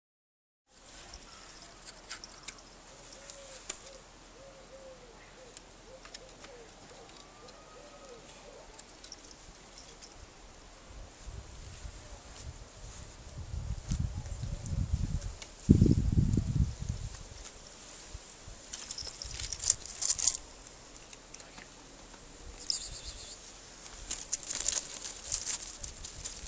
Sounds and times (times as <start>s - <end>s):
Animal: 1.2s - 9.3s.